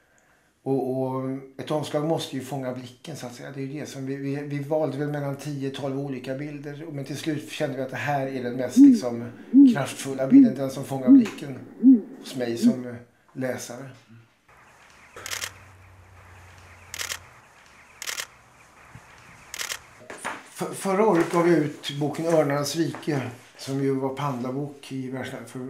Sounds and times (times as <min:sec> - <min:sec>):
Male speech, man speaking: 0:00.7 - 0:11.6, 0:12.3 - 0:14.1, 0:20.1 - 0:25.6.